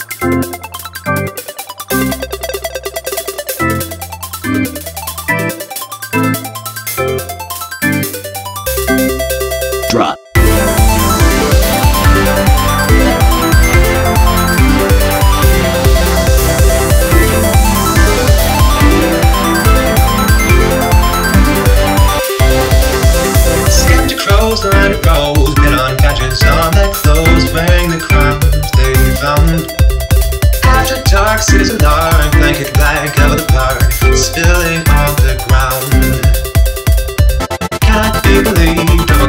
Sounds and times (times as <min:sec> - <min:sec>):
Music: 0:00.0 - 0:39.2.